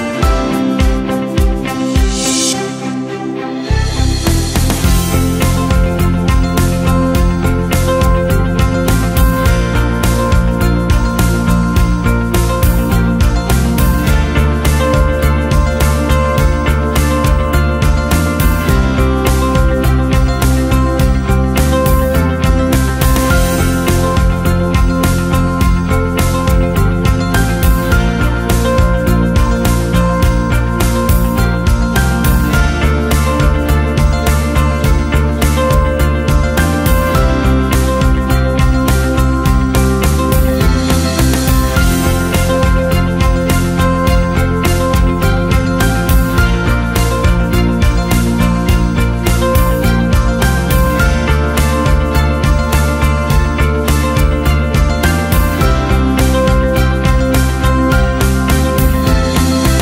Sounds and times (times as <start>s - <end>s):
Background music: 0.0s - 59.8s.